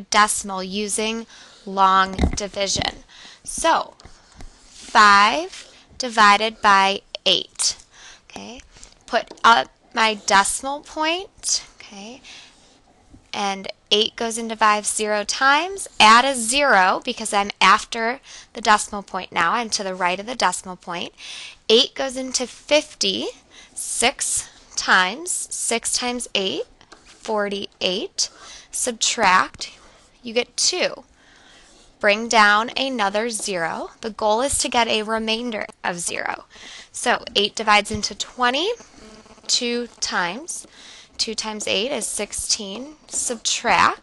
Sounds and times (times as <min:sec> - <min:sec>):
Speech: 0:00.0 - 0:04.0, 0:04.9 - 0:12.3, 0:13.4 - 0:26.7, 0:27.3 - 0:31.0, 0:32.0 - 0:38.8, 0:39.5 - 0:44.0.